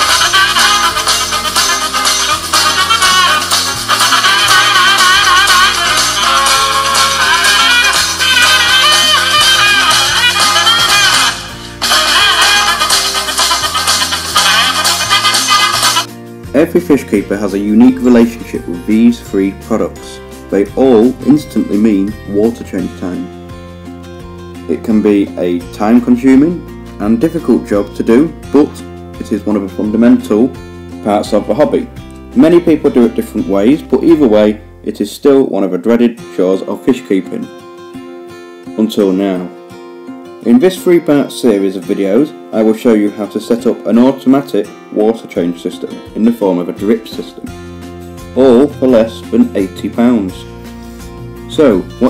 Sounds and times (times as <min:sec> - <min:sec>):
Music: 0:00.0 - 0:52.1
Speech: 0:16.5 - 0:23.3, 0:24.7 - 0:37.5, 0:38.8 - 0:39.5, 0:40.4 - 0:47.5, 0:48.4 - 0:50.5, 0:51.5 - 0:52.1.